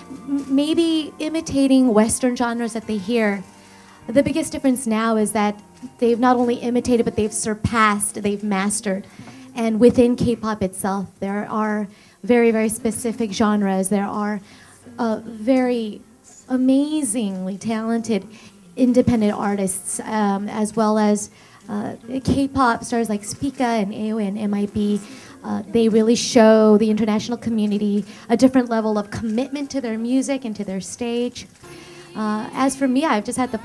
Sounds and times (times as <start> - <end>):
Speech: 0.3 - 3.4, 4.1 - 9.0, 9.6 - 14.4, 15.0 - 31.5, 32.2 - 33.6.